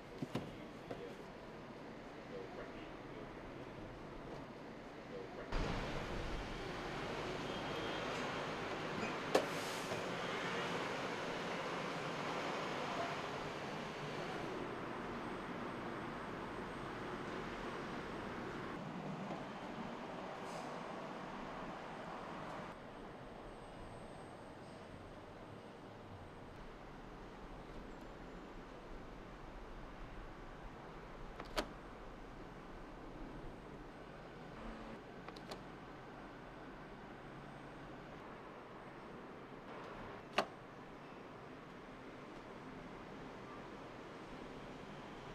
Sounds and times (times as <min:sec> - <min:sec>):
Speech: 0:02.2 - 0:04.0.